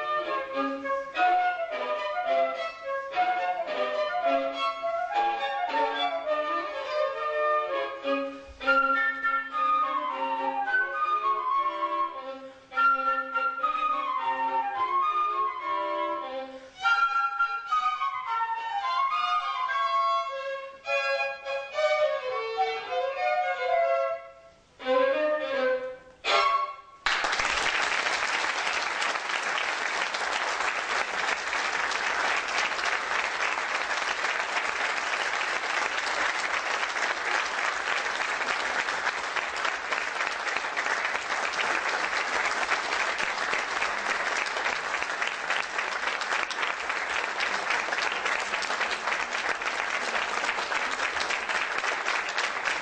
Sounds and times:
Applause: 0:27.0 - 0:52.8.

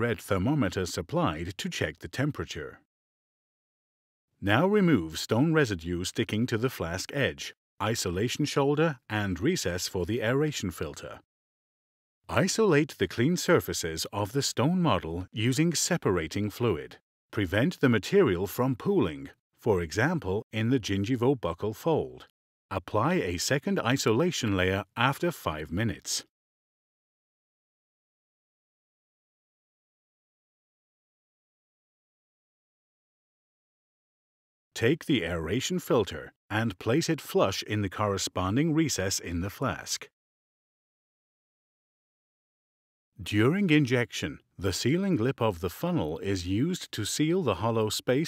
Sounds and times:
Speech: 0:00.0 - 0:02.9, 0:04.4 - 0:11.3, 0:12.3 - 0:26.3, 0:34.8 - 0:40.1, 0:43.2 - 0:48.2.

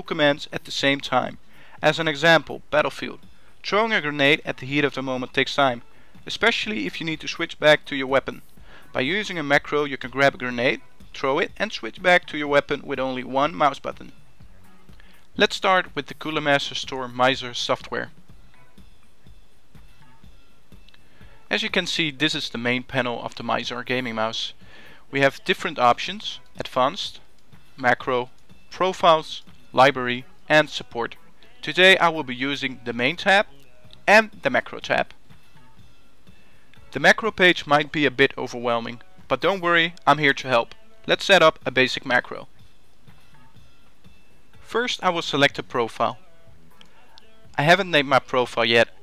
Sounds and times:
Speech: 0:00.0 - 0:14.1, 0:15.4 - 0:18.1, 0:21.5 - 0:27.2, 0:27.8 - 0:35.2, 0:36.9 - 0:42.5, 0:44.7 - 0:46.2, 0:47.6 - 0:49.0
Music: 0:00.0 - 0:49.0.

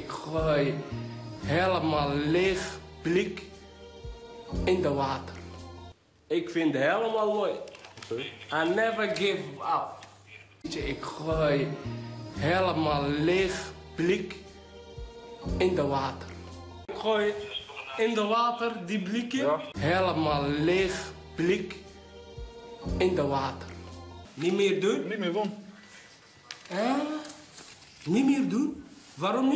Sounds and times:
Music: 0:00.0 - 0:06.0, 0:10.6 - 0:18.0, 0:18.6 - 0:25.9
Speech: 0:06.3 - 0:10.0, 0:16.9 - 0:21.7.

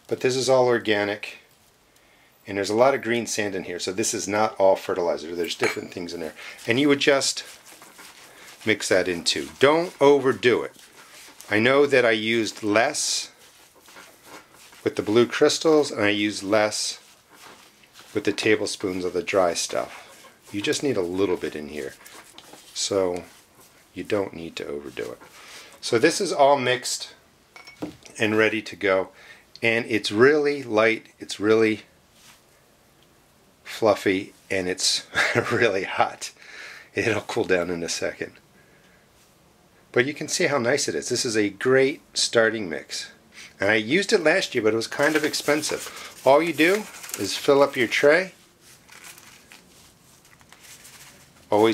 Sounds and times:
Speech: 0:00.0 - 0:01.5, 0:02.4 - 0:07.6, 0:08.6 - 0:10.8, 0:11.4 - 0:13.4, 0:14.8 - 0:17.1, 0:18.1 - 0:22.0, 0:22.7 - 0:23.4, 0:24.0 - 0:27.2, 0:28.1 - 0:31.9, 0:33.6 - 0:38.4, 0:39.9 - 0:48.4, 0:51.5 - 0:51.7
Inside, small room: 0:00.0 - 0:51.7.

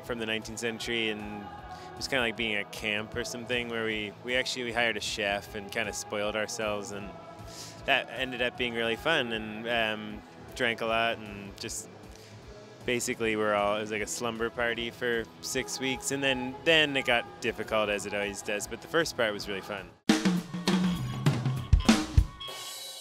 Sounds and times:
Speech: 0:00.0 - 0:07.1, 0:07.9 - 0:11.9, 0:12.9 - 0:19.9
Music: 0:00.0 - 0:23.0.

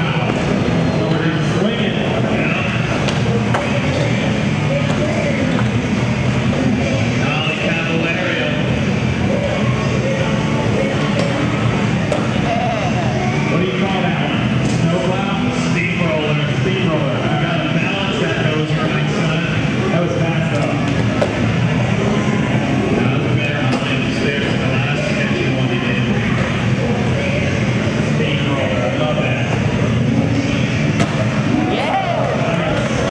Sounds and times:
Speech: 0:00.0 - 0:21.0, 0:22.1 - 0:33.1.

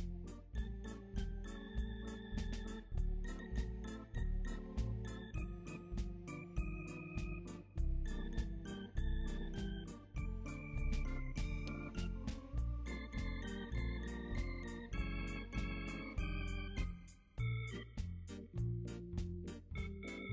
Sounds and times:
Hammond organ: 0:00.0 - 0:20.3.

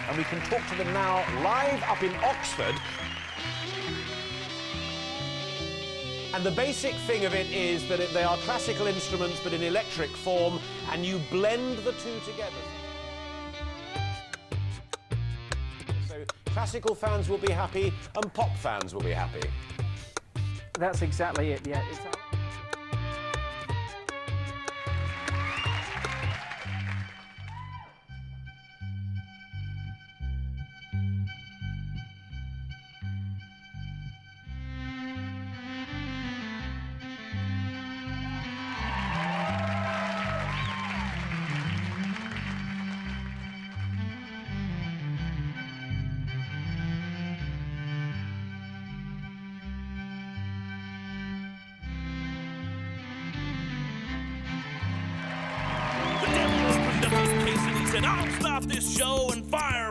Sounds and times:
Speech: 0:00.0 - 0:02.8, 0:06.3 - 0:12.7, 0:16.0 - 0:19.5, 0:20.8 - 0:22.2, 0:56.6 - 0:59.9
Background music: 0:00.0 - 0:59.9.

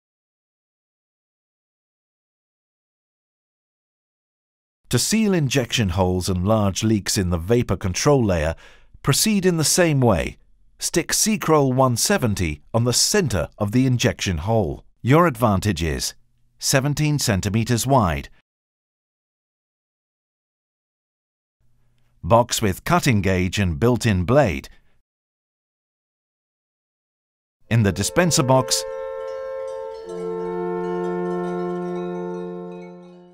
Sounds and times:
Wind chime: 0:27.9 - 0:33.3.

